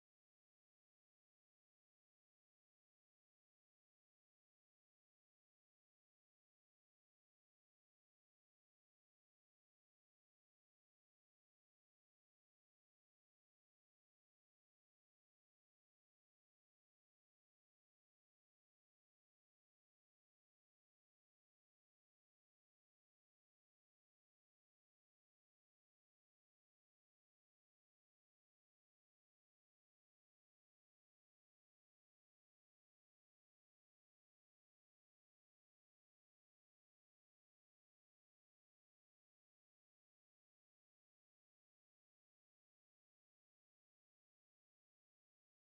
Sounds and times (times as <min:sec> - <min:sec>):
Silence: 0:00.0 - 0:45.7.